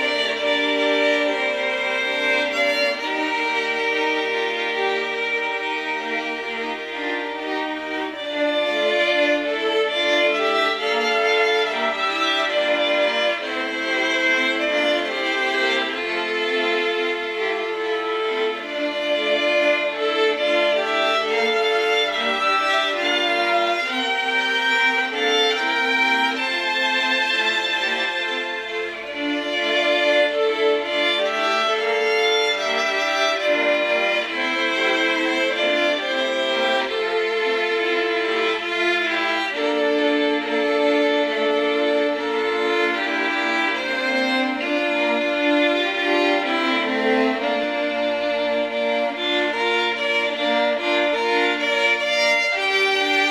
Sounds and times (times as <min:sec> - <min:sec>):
Violin, fiddle: 0:00.0 - 0:53.3.